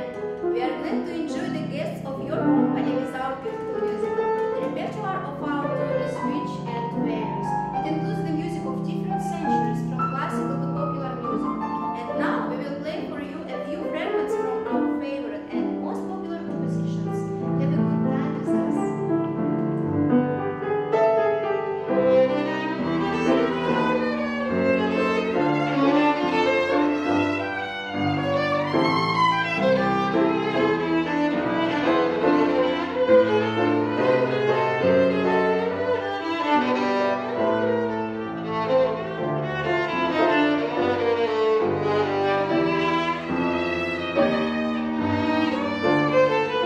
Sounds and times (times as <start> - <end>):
Speech: 0.6 - 19.0.